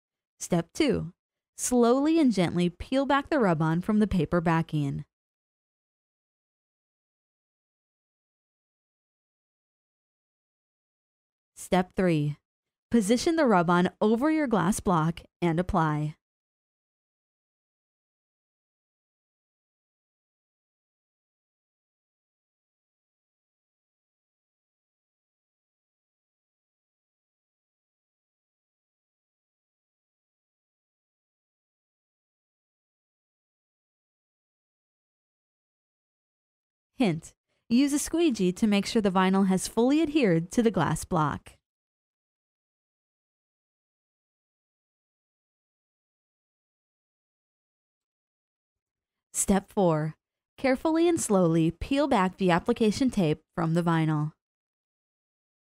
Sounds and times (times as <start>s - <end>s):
Speech: 0.4s - 5.1s, 11.6s - 16.2s, 37.0s - 41.6s, 49.4s - 54.4s.